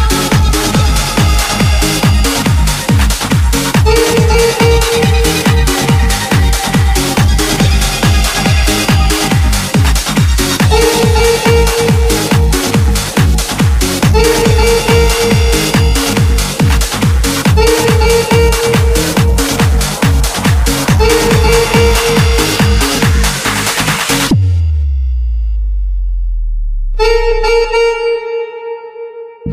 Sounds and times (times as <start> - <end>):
Electronic dance music: 0.0 - 24.4
House music: 0.0 - 24.4
Trance music: 0.0 - 28.1.